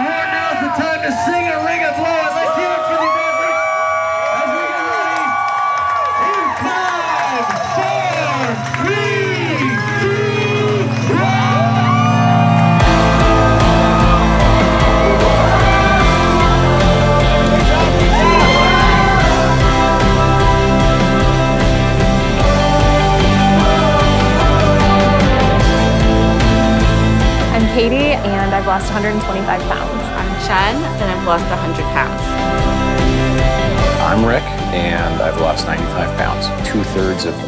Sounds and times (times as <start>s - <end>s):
Music: 0.0s - 37.4s.